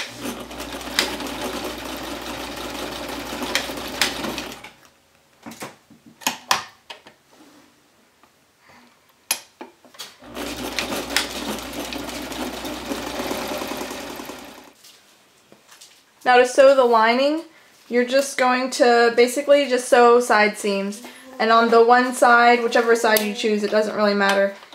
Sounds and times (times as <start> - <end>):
Sewing machine: 0.0 - 4.8, 10.2 - 14.8
Inside, small room: 0.0 - 24.7.